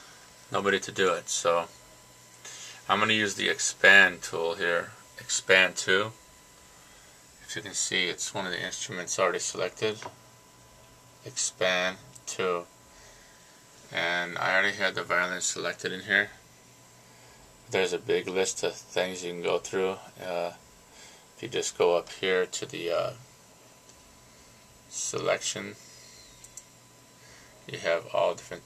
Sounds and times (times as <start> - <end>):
Speech: 0.5 - 1.8, 2.8 - 6.2, 7.4 - 10.2, 11.2 - 12.7, 13.9 - 16.4, 17.7 - 20.6, 21.4 - 23.3, 24.9 - 25.8, 27.7 - 28.6.